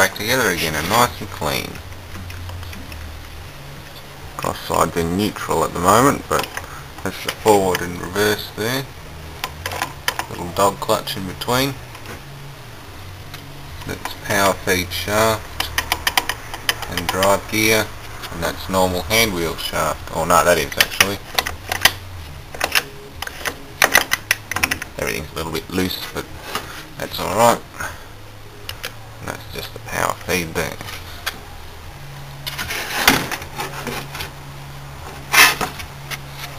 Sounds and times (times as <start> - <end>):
Speech: 0.0 - 1.8, 4.4 - 8.9, 10.3 - 11.8, 13.9 - 15.4, 16.9 - 21.2, 25.0 - 26.3, 27.0 - 28.0, 29.2 - 30.9.